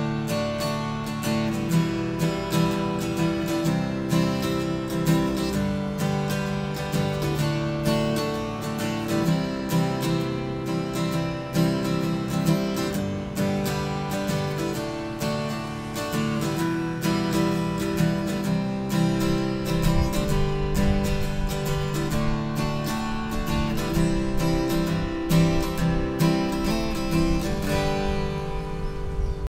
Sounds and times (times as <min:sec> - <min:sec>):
Acoustic guitar: 0:00.0 - 0:29.4
Strum: 0:00.0 - 0:29.4.